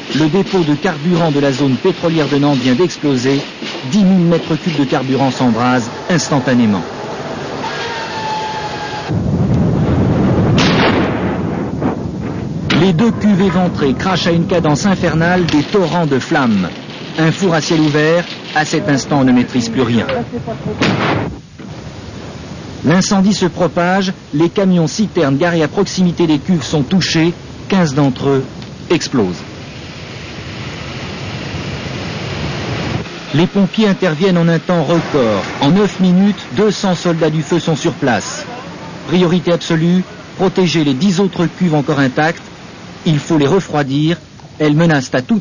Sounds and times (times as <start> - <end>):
Fire: 0.0 - 45.4
Speech: 0.1 - 6.9, 12.7 - 20.9, 22.8 - 29.4, 33.3 - 45.4
Explosion: 9.1 - 19.2, 20.8 - 21.7.